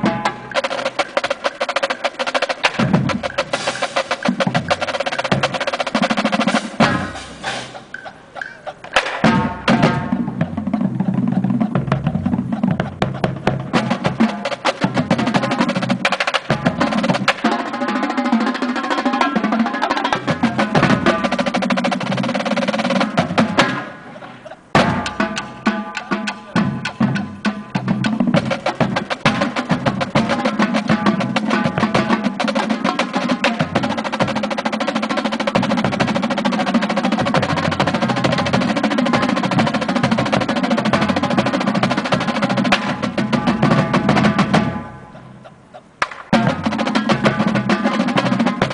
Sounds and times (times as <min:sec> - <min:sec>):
Music: 0:00.0 - 0:48.7.